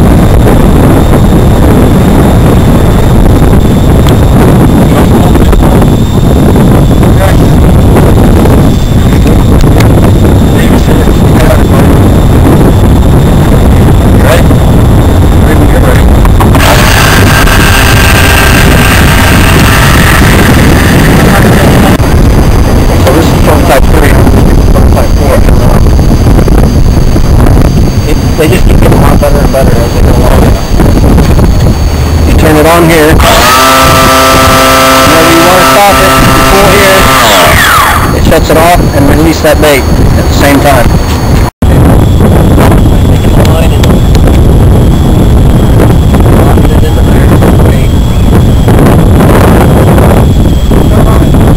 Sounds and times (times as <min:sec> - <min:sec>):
Wind noise (microphone): 0:00.0 - 0:51.5.